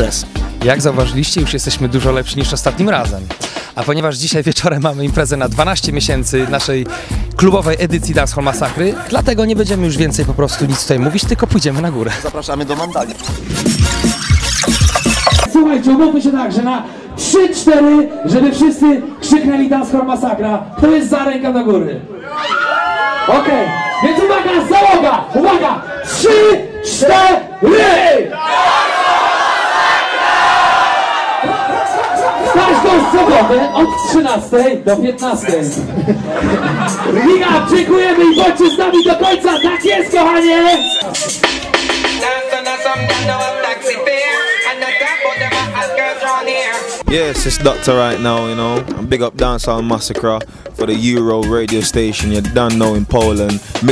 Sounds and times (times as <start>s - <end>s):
Speech: 0.0s - 13.1s, 15.5s - 22.1s, 23.3s - 28.3s, 32.5s - 35.8s, 37.1s - 41.0s, 47.0s - 53.9s.